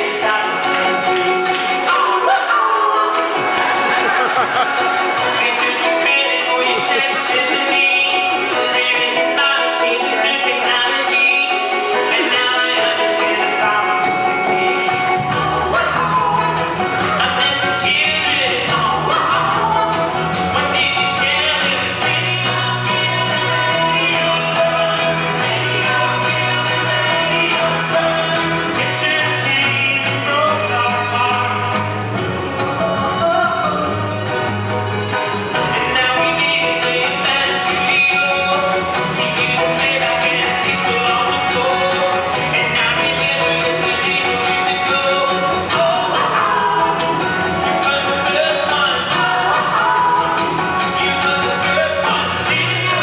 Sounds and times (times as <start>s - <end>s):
Music: 0.0s - 53.0s.